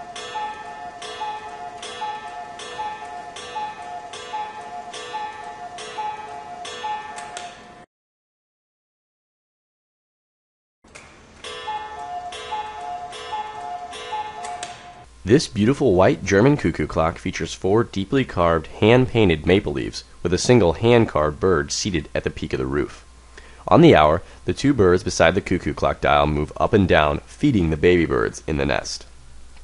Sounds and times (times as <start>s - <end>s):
Speech: 15.2s - 23.0s, 23.6s - 29.1s.